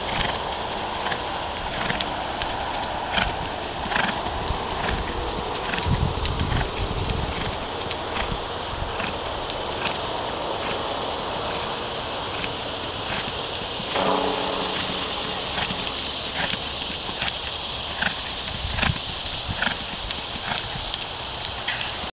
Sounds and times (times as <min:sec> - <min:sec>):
Clip-clop: 0:00.0 - 0:22.1.